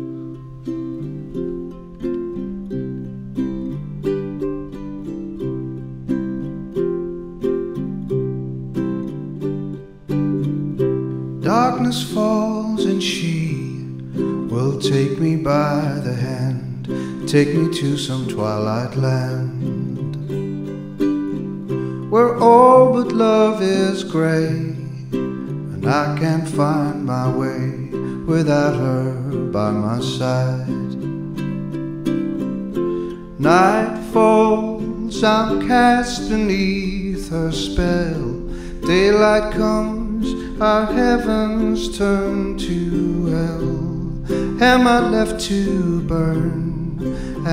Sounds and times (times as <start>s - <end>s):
Musical instrument: 0.0s - 47.5s.